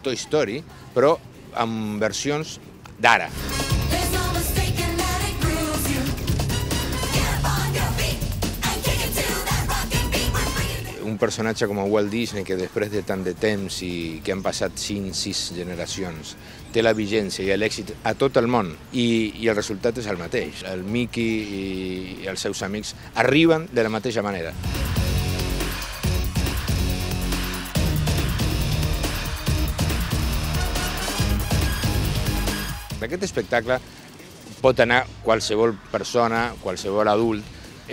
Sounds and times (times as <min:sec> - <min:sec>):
Music: 0:03.2 - 0:16.2, 0:23.3 - 0:33.7
Speech: 0:10.9 - 0:24.6, 0:33.0 - 0:33.8, 0:34.6 - 0:37.9.